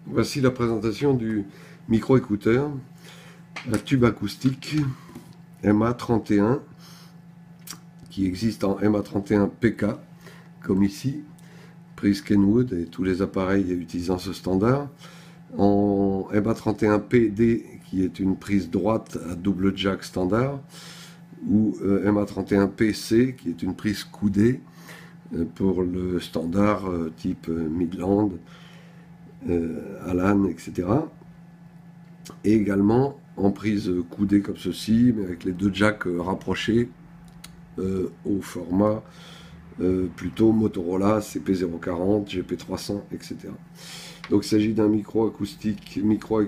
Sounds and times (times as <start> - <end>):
Speech: 0.0 - 2.9, 3.6 - 6.7, 7.7 - 11.3, 12.0 - 20.7, 21.4 - 24.7, 25.3 - 28.5, 29.4 - 31.2, 32.3 - 37.0, 37.7 - 39.1, 39.8 - 43.6, 44.3 - 46.4.